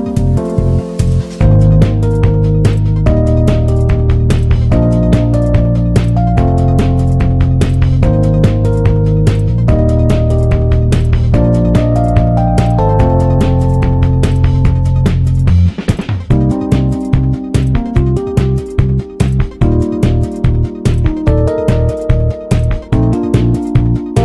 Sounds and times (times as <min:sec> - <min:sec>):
Music: 0:00.0 - 0:24.2.